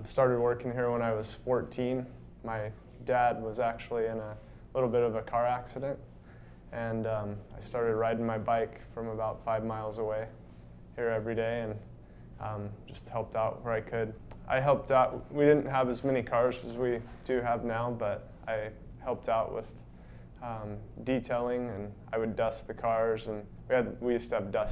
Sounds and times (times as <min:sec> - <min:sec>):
Speech: 0:00.0 - 0:06.0, 0:06.7 - 0:10.4, 0:11.0 - 0:11.8, 0:12.4 - 0:19.8, 0:20.4 - 0:24.7.